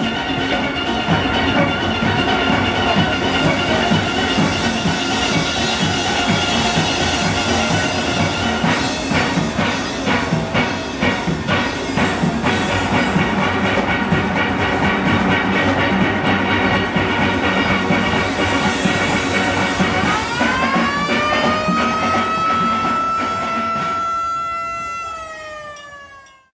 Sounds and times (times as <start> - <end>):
Steelpan: 0.0 - 26.4
Police car (siren): 19.8 - 26.5.